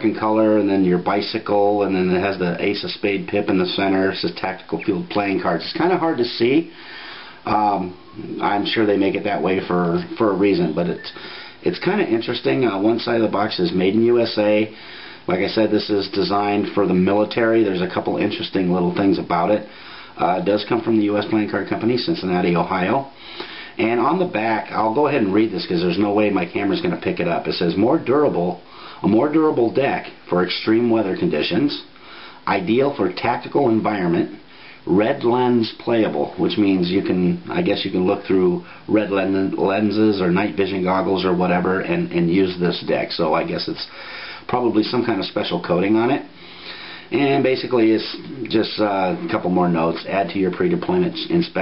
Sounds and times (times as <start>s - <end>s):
Speech: 0.0s - 6.8s, 7.4s - 23.2s, 23.8s - 31.9s, 32.5s - 46.4s, 47.1s - 51.6s.